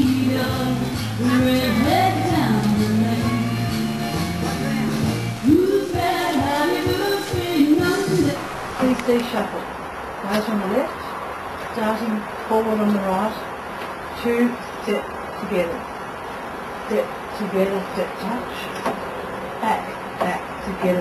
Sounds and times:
Music: 0:00.0 - 0:08.4
Speech: 0:08.8 - 0:11.1, 0:11.7 - 0:13.5, 0:14.2 - 0:15.8, 0:16.9 - 0:18.8, 0:19.6 - 0:21.0.

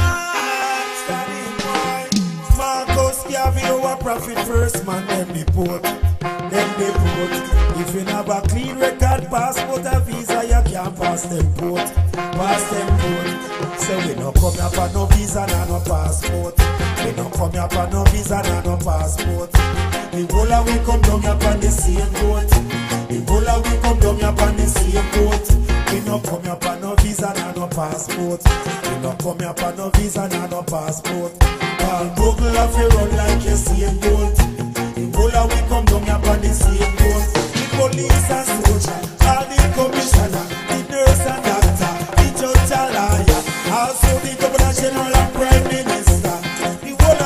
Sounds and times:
Rhythm and blues: 0:00.0 - 0:47.2.

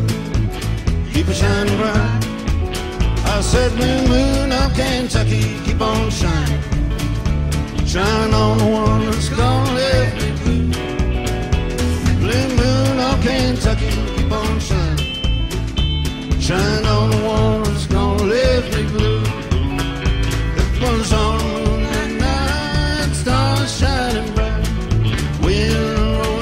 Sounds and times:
Music: 0:00.0 - 0:26.4.

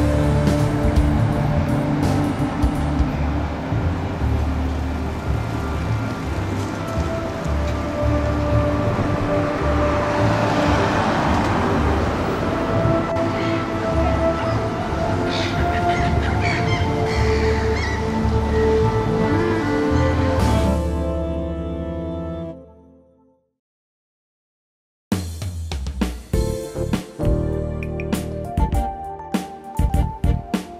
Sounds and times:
Music: 0:00.0 - 0:23.6, 0:25.1 - 0:30.7
Outside, urban or manmade: 0:00.0 - 0:23.6, 0:25.2 - 0:30.7.

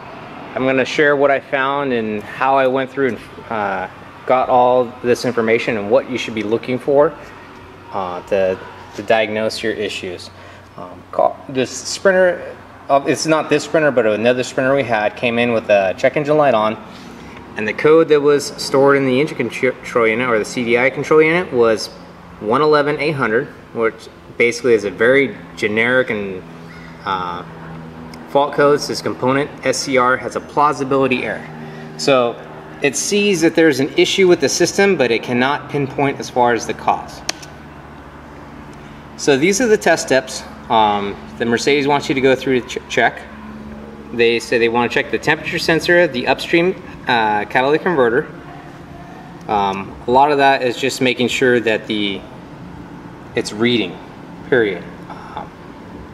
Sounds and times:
Speech: 0:00.6 - 0:07.2, 0:07.9 - 0:16.8, 0:17.6 - 0:26.4, 0:27.0 - 0:27.5, 0:28.3 - 0:37.3, 0:39.2 - 0:43.3, 0:44.1 - 0:48.4, 0:49.5 - 0:52.3, 0:53.4 - 0:55.5.

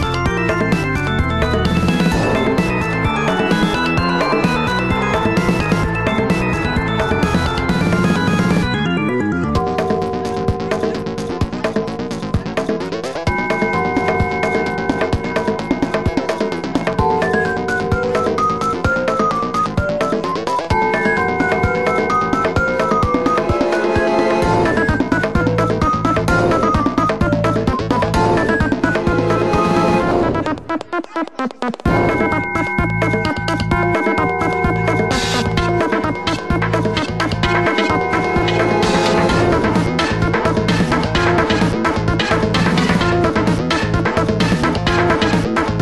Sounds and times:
Music: 0:00.0 - 0:45.8.

